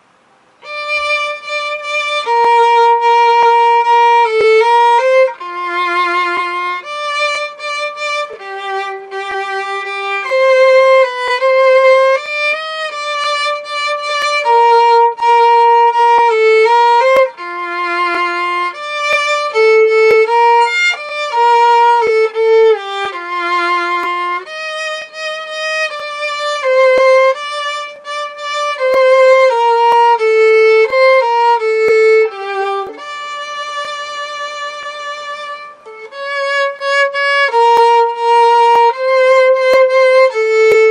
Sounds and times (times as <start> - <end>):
Violin, fiddle: 0.0 - 40.9.